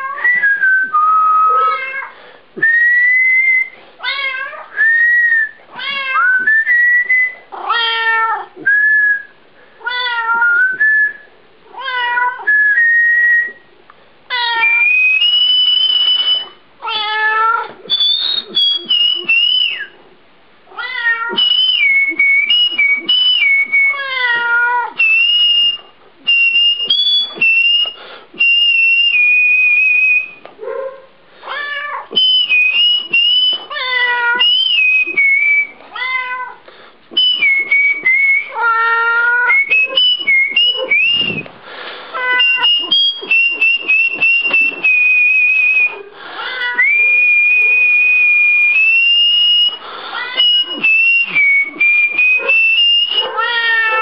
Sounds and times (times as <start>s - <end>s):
Whistling: 0.0s - 1.9s, 2.6s - 3.8s, 4.7s - 7.5s, 8.6s - 9.4s, 10.3s - 11.3s, 12.4s - 13.7s, 14.5s - 16.6s, 17.9s - 20.0s, 21.3s - 30.5s, 32.2s - 35.8s, 37.1s - 41.6s, 42.2s - 54.0s.